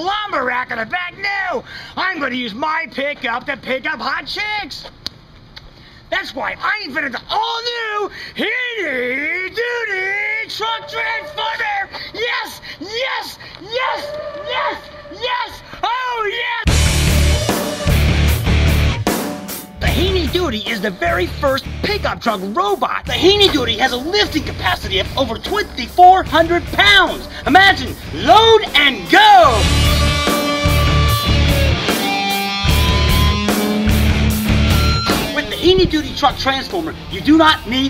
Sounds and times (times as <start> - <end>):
Speech: 0.0 - 4.9, 6.1 - 16.7, 19.8 - 29.7, 35.2 - 37.8
Music: 10.7 - 11.9, 16.7 - 37.8.